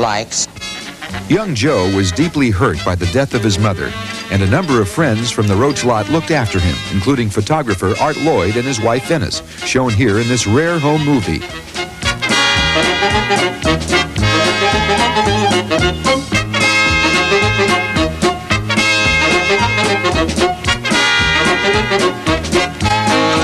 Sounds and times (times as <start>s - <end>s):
Speech: 0.0s - 0.5s, 1.3s - 11.5s
Music: 0.0s - 23.4s.